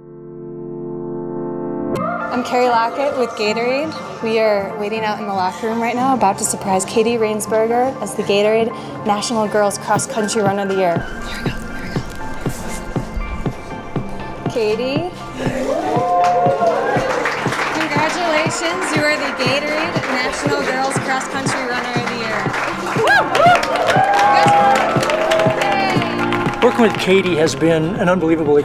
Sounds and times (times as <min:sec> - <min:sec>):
Music: 0:00.0 - 0:28.6
Inside, large room or hall: 0:02.0 - 0:28.6.